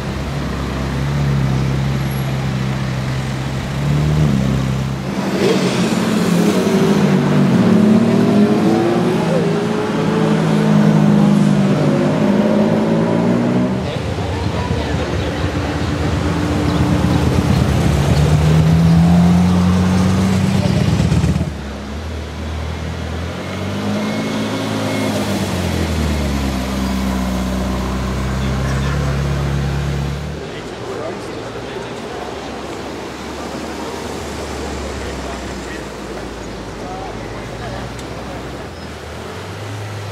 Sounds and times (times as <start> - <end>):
Car: 0.0 - 40.1
Speech: 13.7 - 16.9, 20.2 - 21.2, 28.2 - 38.8.